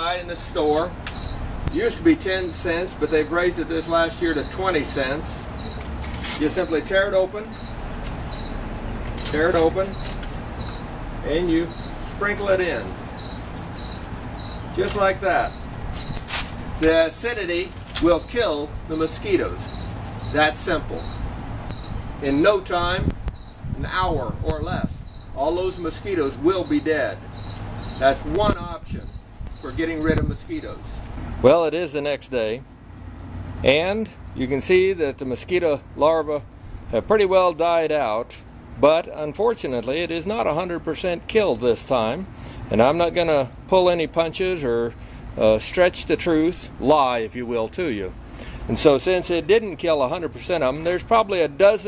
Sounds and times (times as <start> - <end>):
Speech: 0.0 - 0.9, 1.7 - 5.5, 6.3 - 7.6, 9.2 - 10.0, 11.2 - 13.0, 14.7 - 15.6, 16.8 - 19.7, 20.3 - 21.0, 22.2 - 23.1, 23.8 - 27.2, 28.0 - 32.7, 33.6 - 51.8.